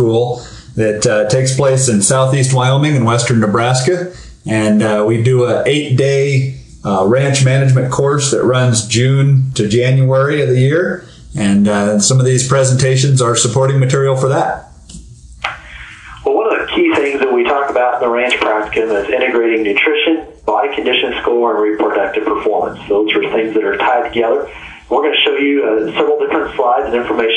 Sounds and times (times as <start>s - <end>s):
Speech: 0.0s - 27.3s.